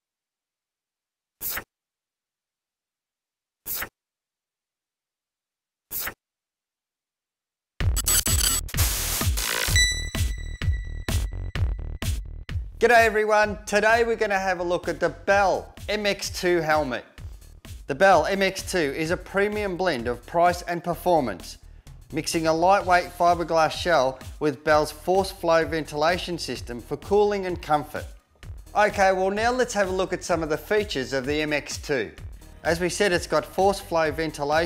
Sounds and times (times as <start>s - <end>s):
Music: 7.8s - 34.6s
Speech: 12.8s - 17.1s, 17.9s - 28.2s, 28.8s - 34.6s.